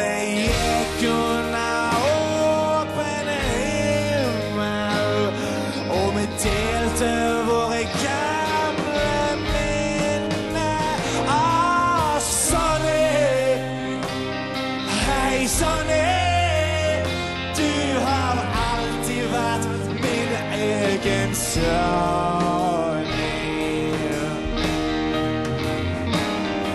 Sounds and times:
Music: 0.0 - 26.7.

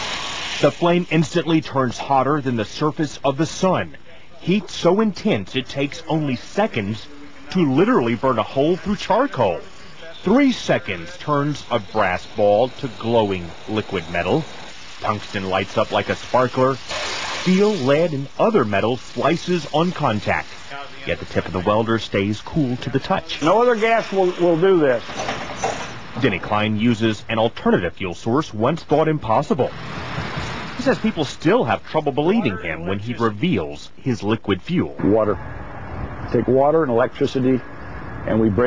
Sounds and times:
Speech: 0.6 - 16.8, 17.4 - 25.1, 26.2 - 29.7, 30.8 - 35.4, 36.3 - 37.6, 38.2 - 38.6.

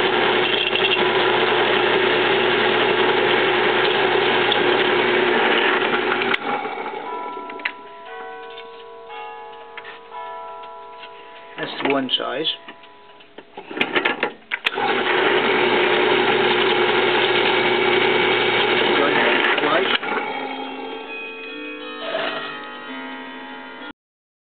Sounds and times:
Speech: 11.6 - 12.7, 18.9 - 20.0.

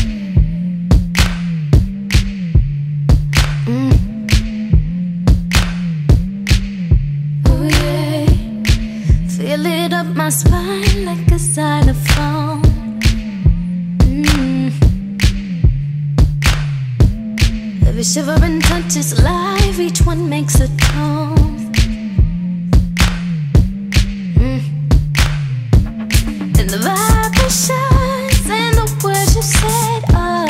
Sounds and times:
Pop music: 7.5 - 13.2, 17.8 - 22.0, 25.9 - 30.4.

